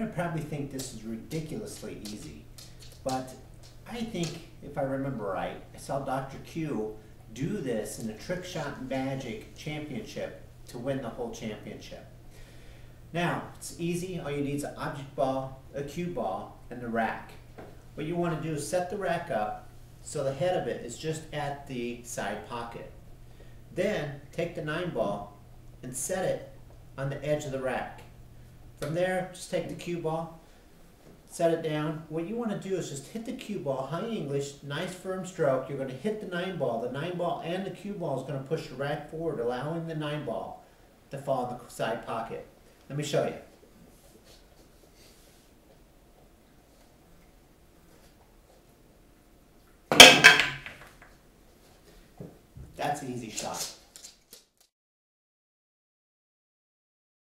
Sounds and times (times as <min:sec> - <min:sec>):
Speech: 0:00.0 - 0:12.1, 0:13.1 - 0:17.4, 0:18.0 - 0:23.0, 0:23.7 - 0:28.1, 0:28.8 - 0:30.4, 0:31.3 - 0:43.6, 0:52.8 - 0:53.8.